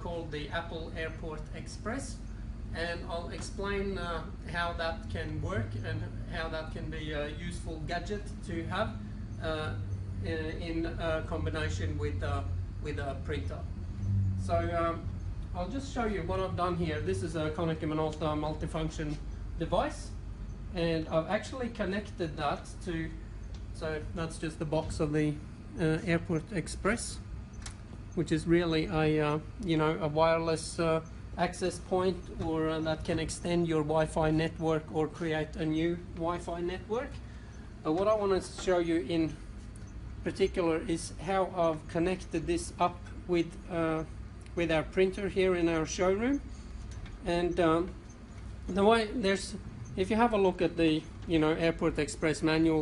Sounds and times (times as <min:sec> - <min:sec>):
Speech: 0:00.0 - 0:13.7, 0:14.4 - 0:23.2, 0:23.8 - 0:27.3, 0:28.2 - 0:37.2, 0:37.8 - 0:39.4, 0:40.2 - 0:46.5, 0:47.2 - 0:48.0, 0:48.7 - 0:52.8.